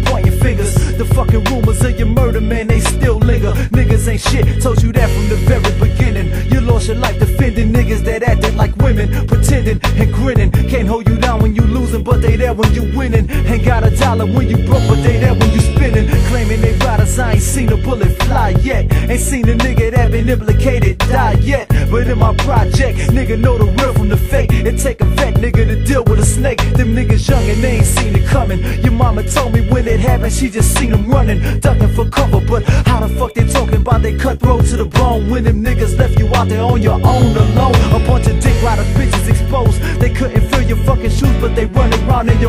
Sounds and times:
Music: 0.0 - 42.4.

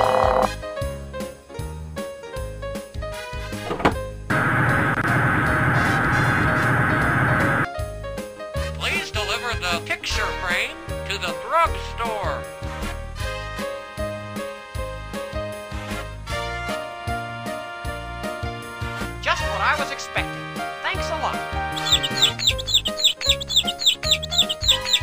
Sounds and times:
Music: 0.0 - 25.0
Speech: 8.8 - 12.4, 19.2 - 21.4.

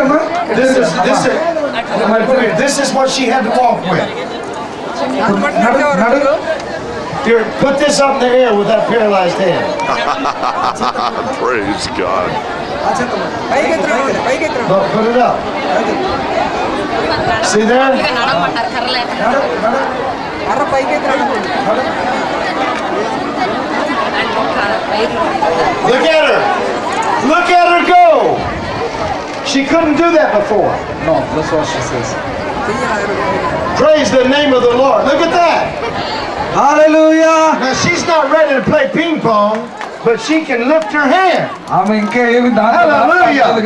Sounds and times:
Outside, urban or manmade: 0.0 - 43.6.

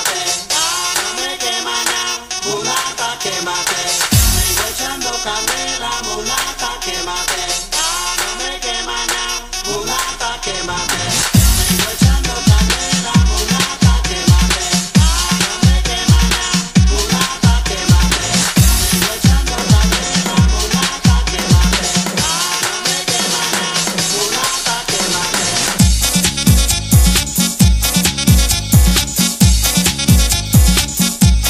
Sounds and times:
Disco: 0.0 - 31.5
House music: 0.0 - 31.5.

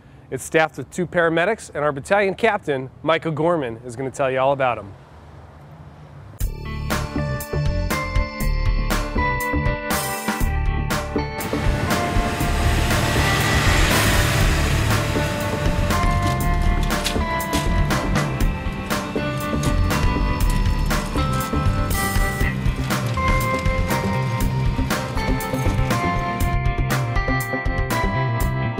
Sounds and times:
Music: 6.4 - 28.7.

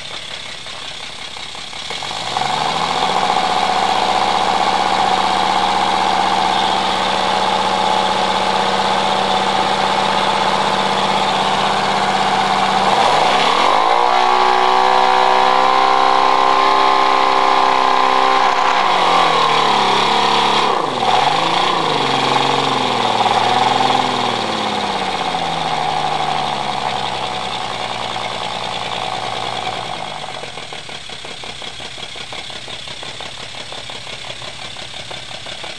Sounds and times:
Medium engine (mid frequency): 0.0 - 35.7.

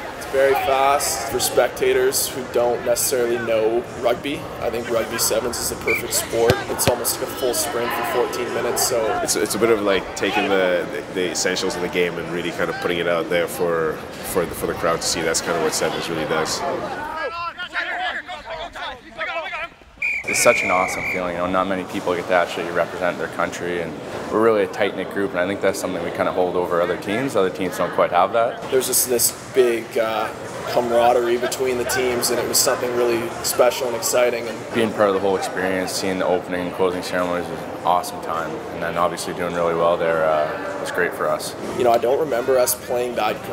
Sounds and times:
Male speech, man speaking: 0.2 - 19.7, 20.3 - 43.5.

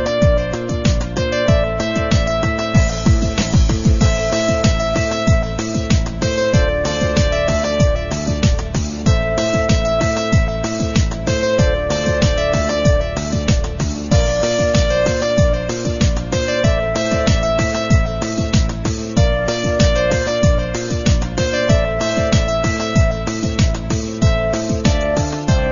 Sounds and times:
Music: 0.0 - 25.7.

